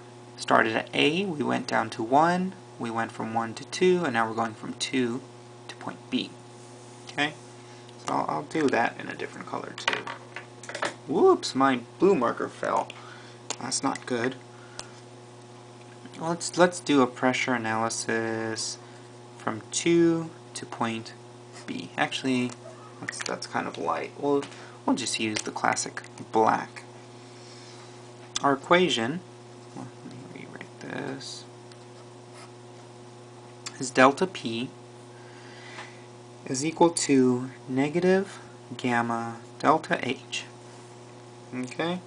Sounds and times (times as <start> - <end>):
Speech: 0.4 - 6.4, 7.1 - 7.4, 8.0 - 9.9, 11.1 - 12.9, 13.5 - 14.4, 16.1 - 18.8, 19.4 - 26.9, 28.4 - 31.5, 33.7 - 34.8, 36.4 - 40.6, 41.5 - 42.0.